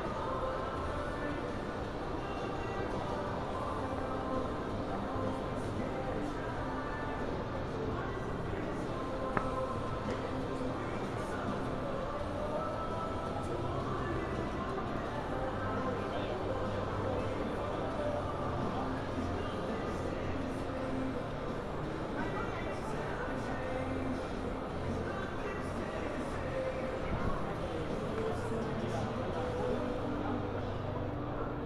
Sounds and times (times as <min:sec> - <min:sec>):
Music: 0:00.0 - 0:31.6
Speech: 0:00.0 - 0:31.6.